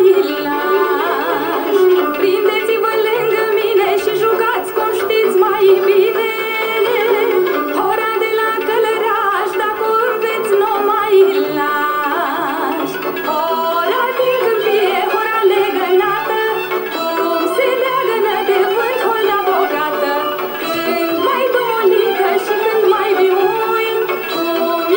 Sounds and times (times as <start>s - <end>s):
Folk music: 0.0s - 24.9s
Traditional music: 0.0s - 24.9s.